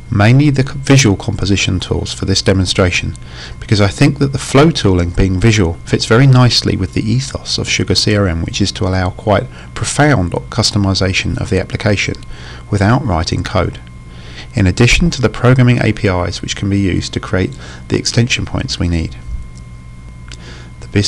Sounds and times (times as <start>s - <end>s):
Speech: 0.1s - 13.9s, 14.5s - 19.2s, 20.8s - 21.0s.